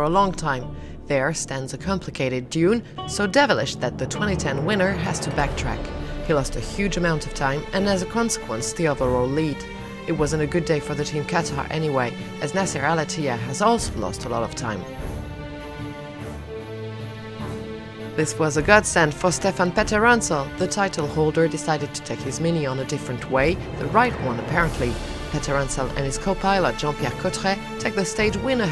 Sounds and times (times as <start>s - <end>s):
Speech: 0.0s - 15.0s, 18.2s - 28.7s
Music: 0.0s - 28.7s.